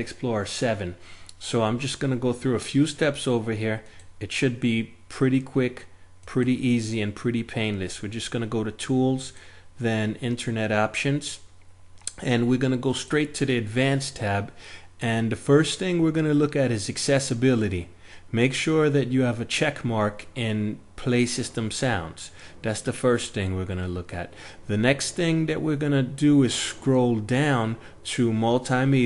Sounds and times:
Speech: 0.0 - 11.5, 12.1 - 29.0.

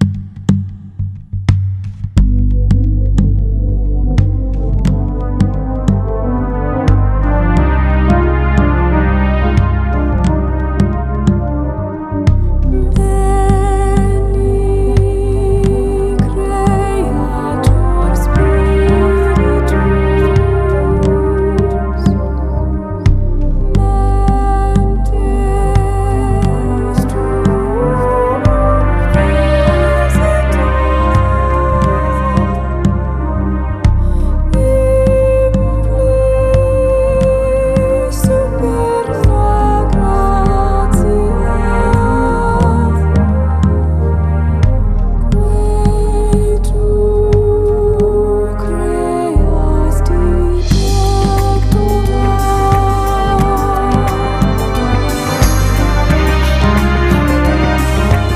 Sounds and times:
Soundtrack music: 0.0 - 58.3.

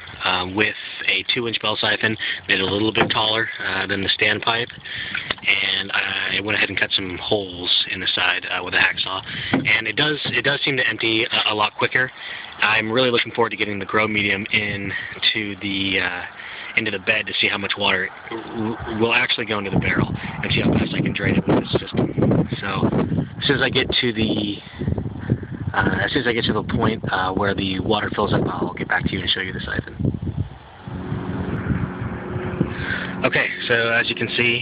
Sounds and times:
Speech: 0.2 - 24.7, 25.7 - 30.0, 32.9 - 34.6.

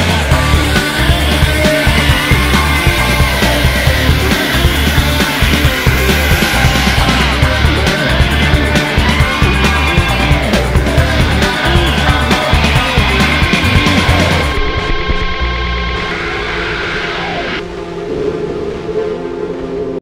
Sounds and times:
Angry music: 0.0 - 19.0.

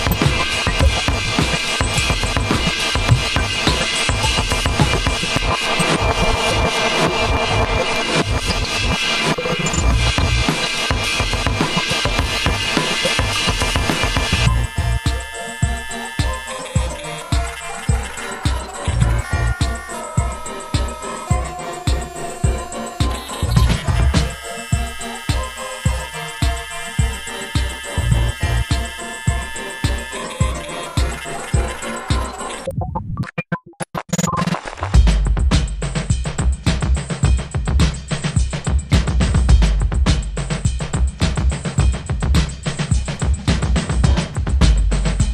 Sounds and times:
Bass drum: 0.0 - 8.6, 21.9 - 24.4, 34.9 - 45.3.

